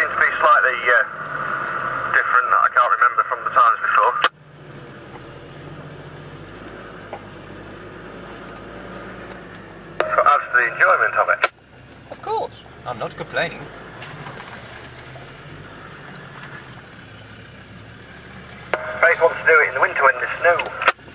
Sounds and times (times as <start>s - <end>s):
Speech: 0.0s - 1.1s, 2.1s - 4.3s, 10.1s - 11.5s, 12.2s - 13.7s, 19.0s - 21.0s
Car: 0.0s - 21.1s
Outside, rural or natural: 0.0s - 21.1s.